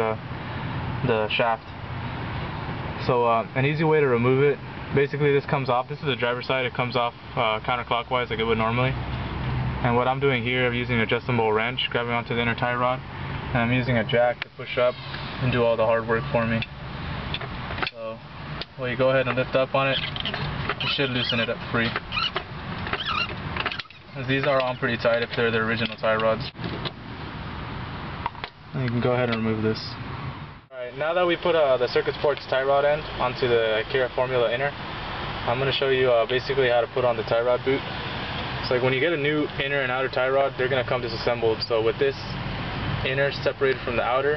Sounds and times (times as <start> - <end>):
Speech: 0.0 - 0.2, 1.0 - 1.8, 3.0 - 9.0, 9.8 - 16.7, 17.9 - 20.1, 20.8 - 22.0, 24.2 - 26.6, 28.7 - 30.0, 30.7 - 34.8, 35.4 - 37.8, 38.6 - 42.4, 43.0 - 44.3.